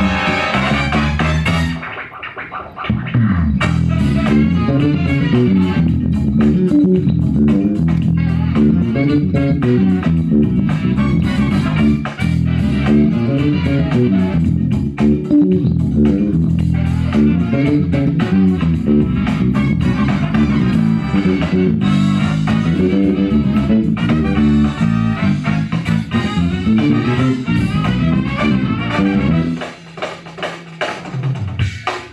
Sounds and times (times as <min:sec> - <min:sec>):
Bass guitar: 0:00.0 - 0:32.1
Electric guitar: 0:00.0 - 0:32.1.